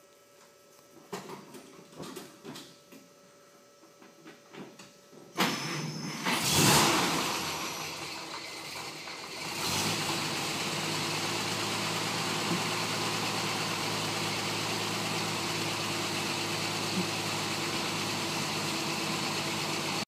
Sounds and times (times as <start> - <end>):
Vehicle: 5.4 - 20.0.